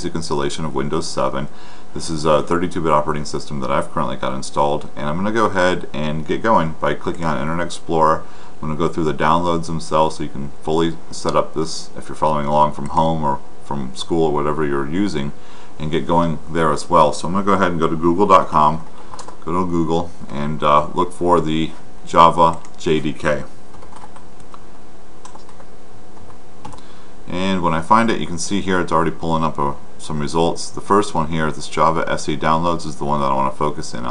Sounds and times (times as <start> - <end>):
Speech: 0.0 - 23.6, 27.3 - 34.1
Computer keyboard: 19.1 - 19.4, 23.7 - 24.6, 25.2 - 26.8.